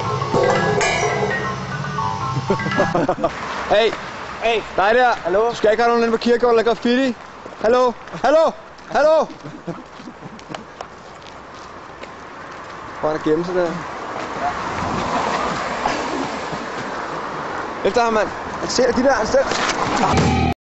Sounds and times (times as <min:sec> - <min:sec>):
Music: 0:00.0 - 0:03.0, 0:20.2 - 0:20.5
Speech: 0:17.8 - 0:20.2.